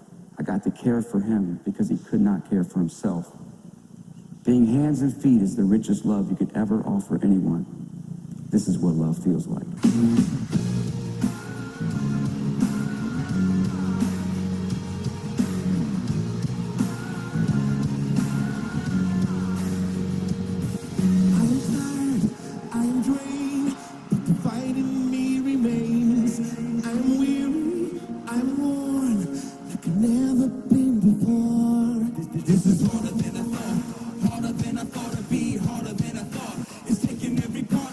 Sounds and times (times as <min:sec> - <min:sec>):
Music: 0:09.7 - 0:37.9.